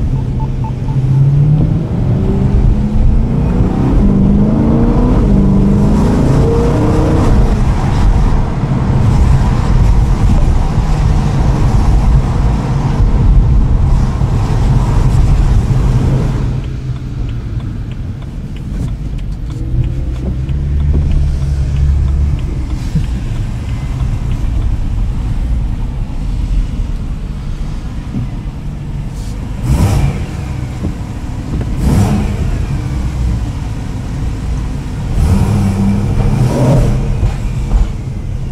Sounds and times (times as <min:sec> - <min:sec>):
Car: 0:00.0 - 0:38.5
Outside, urban or manmade: 0:00.0 - 0:38.5.